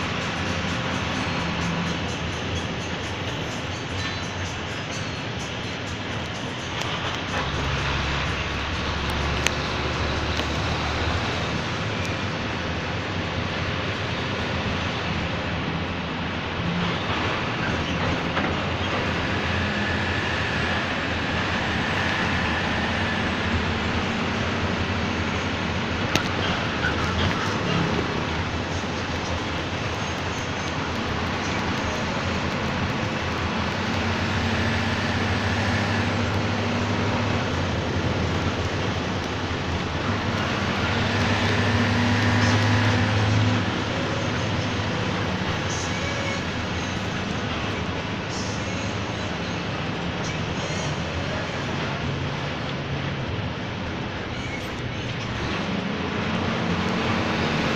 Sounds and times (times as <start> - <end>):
Vehicle: 0.0 - 57.7.